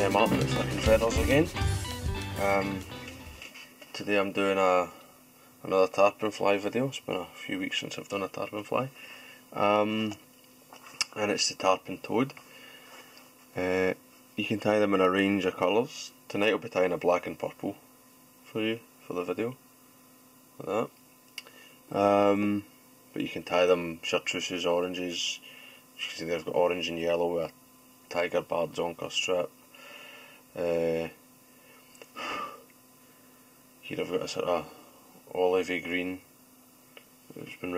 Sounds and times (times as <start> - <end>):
Speech: 0.0 - 1.6, 2.4 - 2.8, 4.0 - 5.0, 5.6 - 10.2, 11.0 - 12.4, 13.6 - 17.8, 18.5 - 19.6, 20.6 - 21.0, 21.9 - 29.5, 30.6 - 31.2, 33.8 - 36.3, 37.3 - 37.7.